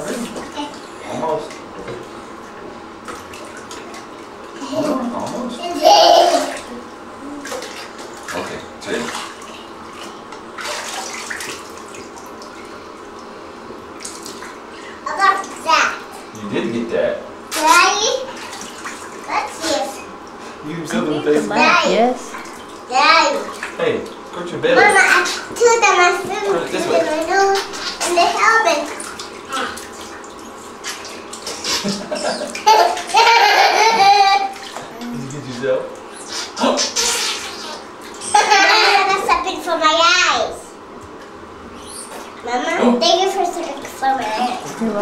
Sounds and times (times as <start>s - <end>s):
Bathtub (filling or washing): 0.0s - 45.0s.